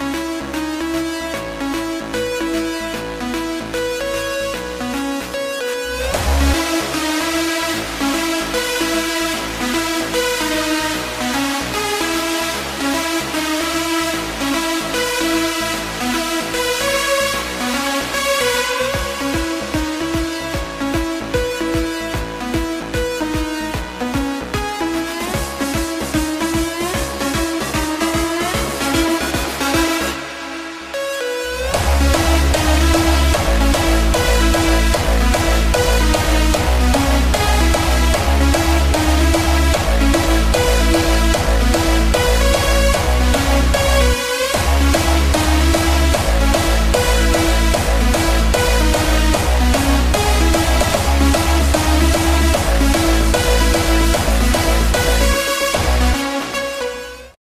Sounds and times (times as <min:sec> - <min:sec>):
Music: 0:00.0 - 0:57.4.